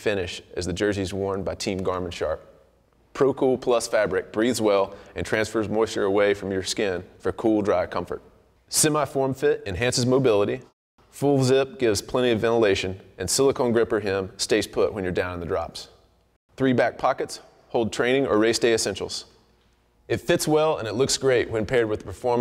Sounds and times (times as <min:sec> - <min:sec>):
Speech: 0:00.0 - 0:02.5, 0:03.2 - 0:16.0, 0:16.6 - 0:19.3, 0:20.1 - 0:22.4.